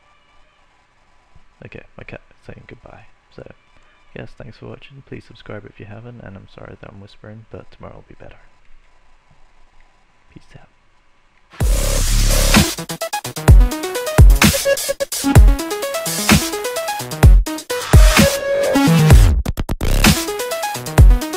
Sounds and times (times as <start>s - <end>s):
Dubstep: 11.6s - 21.3s.